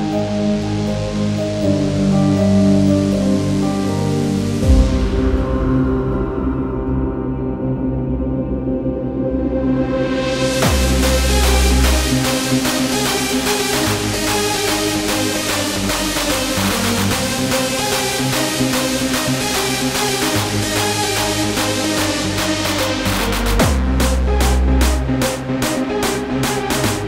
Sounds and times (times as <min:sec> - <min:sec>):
Techno: 0:10.0 - 0:27.0.